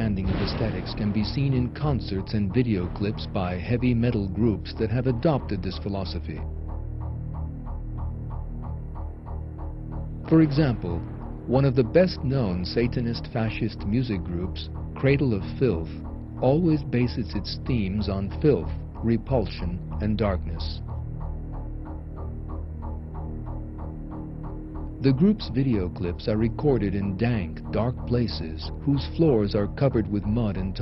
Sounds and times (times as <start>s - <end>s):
Speech: 0.0s - 6.4s, 10.3s - 20.8s, 25.0s - 30.8s
Soundtrack music: 0.0s - 30.8s.